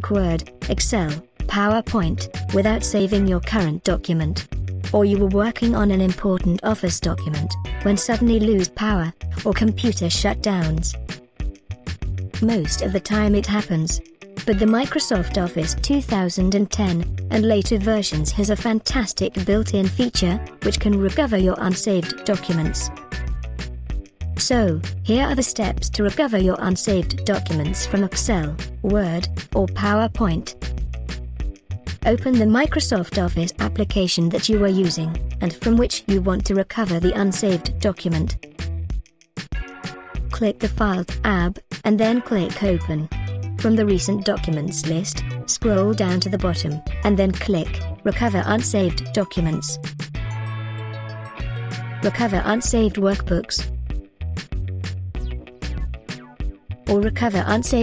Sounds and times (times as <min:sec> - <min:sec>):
Speech: 0:00.0 - 0:11.0, 0:12.4 - 0:22.9, 0:24.4 - 0:30.5, 0:32.0 - 0:38.4, 0:40.3 - 0:49.8, 0:52.0 - 0:53.7, 0:56.9 - 0:57.8
Music: 0:00.0 - 0:57.8.